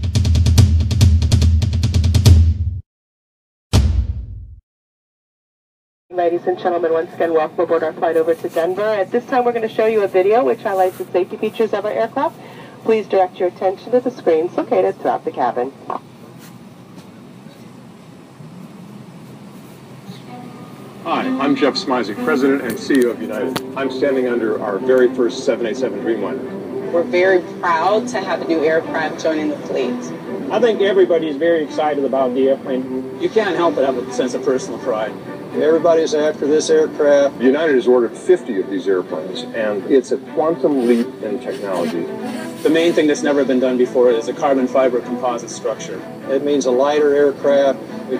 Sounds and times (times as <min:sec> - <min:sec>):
Music: 0:00.0 - 0:02.8, 0:20.2 - 0:48.2
Speech: 0:06.2 - 0:15.8, 0:21.1 - 0:48.2.